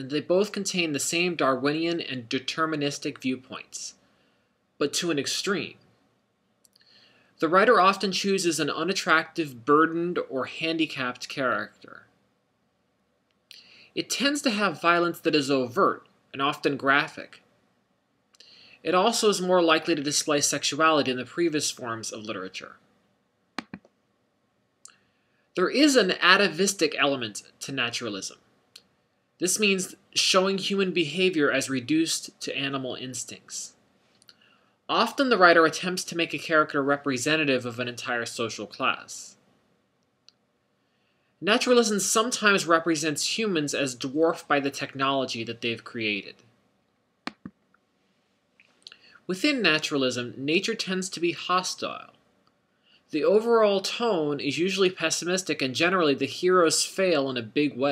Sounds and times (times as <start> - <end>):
Speech: 0.0 - 4.0, 4.8 - 5.8, 7.4 - 12.1, 13.5 - 17.4, 18.8 - 22.8, 25.6 - 28.4, 29.4 - 33.8, 34.9 - 39.4, 41.4 - 46.4, 48.9 - 52.2, 53.1 - 57.9.